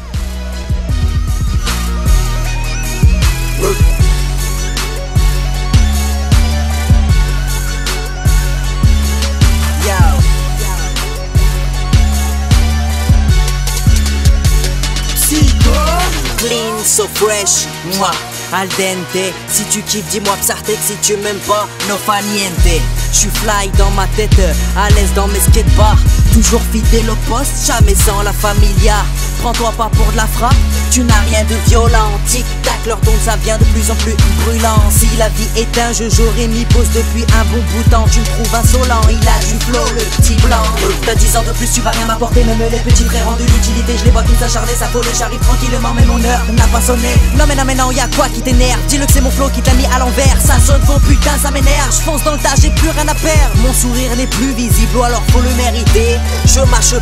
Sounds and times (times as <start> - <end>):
Music: 0.0 - 57.0.